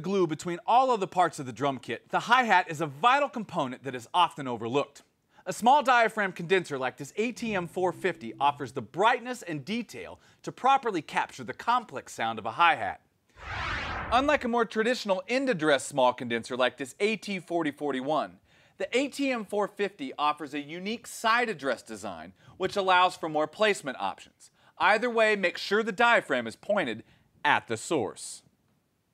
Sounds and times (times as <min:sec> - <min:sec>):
Speech: 0:00.0 - 0:13.1, 0:14.1 - 0:28.5.